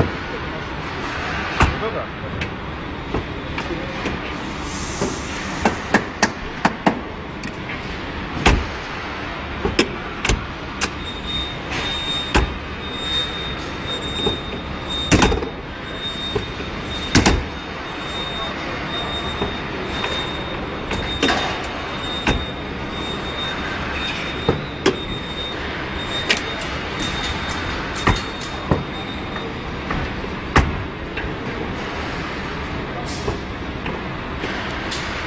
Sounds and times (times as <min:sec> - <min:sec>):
Car: 0:00.0 - 0:35.2.